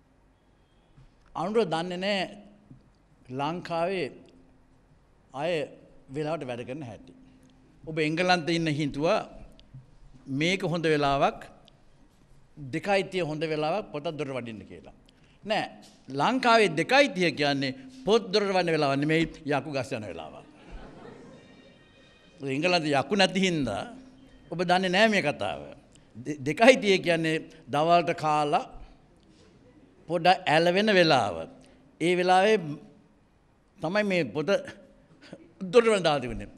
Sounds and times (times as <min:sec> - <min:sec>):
Narration, monologue: 0:00.6 - 0:21.2, 0:22.3 - 0:36.5
Male speech, man speaking: 0:01.4 - 0:02.4, 0:03.3 - 0:04.2, 0:05.4 - 0:07.0, 0:07.9 - 0:09.4, 0:10.3 - 0:11.5, 0:12.6 - 0:20.5, 0:22.4 - 0:28.8, 0:30.1 - 0:32.8, 0:33.8 - 0:34.8, 0:35.6 - 0:36.5.